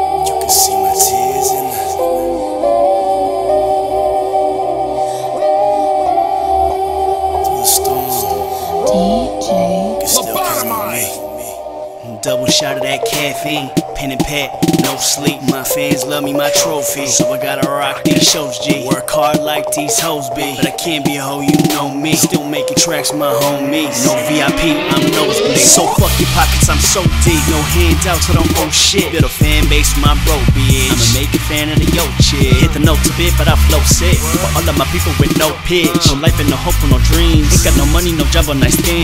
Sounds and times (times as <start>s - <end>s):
Music: 0.0s - 39.0s.